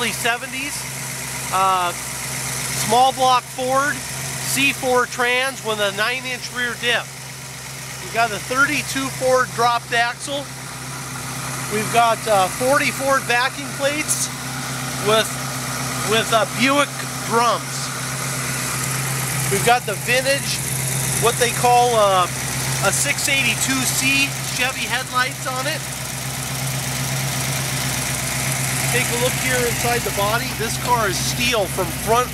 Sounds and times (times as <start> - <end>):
Speech: 0.0 - 0.9, 1.5 - 2.0, 2.8 - 7.1, 8.0 - 10.5, 11.7 - 14.3, 15.0 - 15.4, 16.0 - 17.9, 19.5 - 20.6, 21.2 - 25.9, 28.9 - 32.3
Vehicle: 0.0 - 32.3.